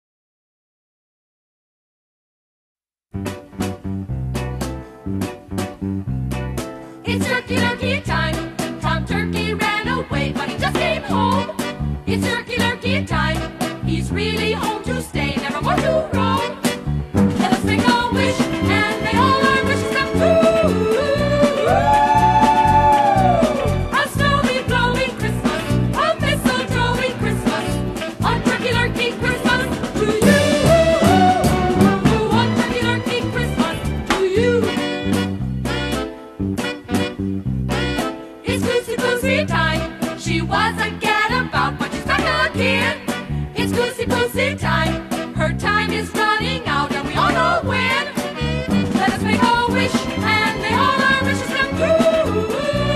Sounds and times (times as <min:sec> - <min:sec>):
Music: 0:03.1 - 0:52.9.